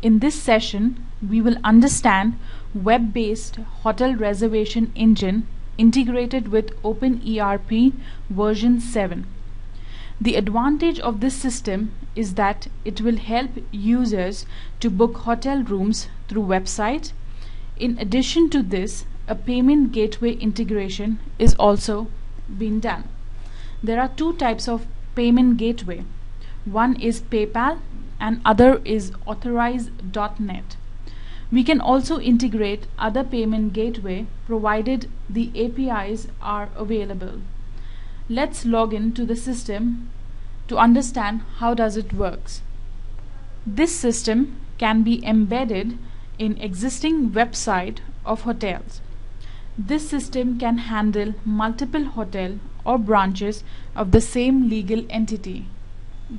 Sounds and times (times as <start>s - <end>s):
Speech: 0.0s - 9.4s, 10.2s - 17.2s, 17.8s - 23.1s, 23.8s - 26.1s, 26.7s - 30.8s, 31.5s - 37.5s, 38.3s - 40.1s, 40.7s - 42.7s, 43.7s - 49.0s, 49.8s - 55.7s.